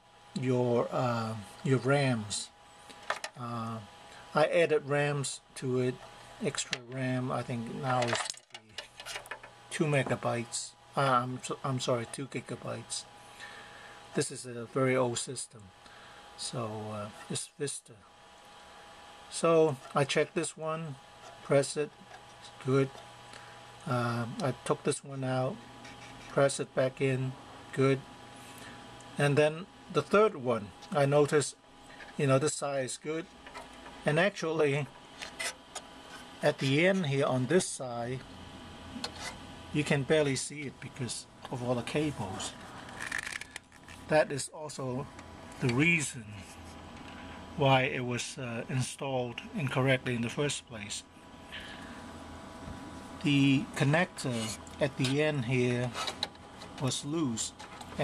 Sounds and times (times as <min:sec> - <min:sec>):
Inside, small room: 0:00.0 - 0:58.0
Speech: 0:00.4 - 0:02.5, 0:03.4 - 0:08.8, 0:09.7 - 0:13.1, 0:14.2 - 0:15.7, 0:16.4 - 0:18.0, 0:19.3 - 0:23.0, 0:23.8 - 0:25.6, 0:26.3 - 0:28.0, 0:29.2 - 0:31.6, 0:32.2 - 0:33.3, 0:34.0 - 0:34.9, 0:36.4 - 0:38.2, 0:39.7 - 0:42.6, 0:44.1 - 0:46.5, 0:47.6 - 0:51.0, 0:53.2 - 0:56.0, 0:56.8 - 0:58.0.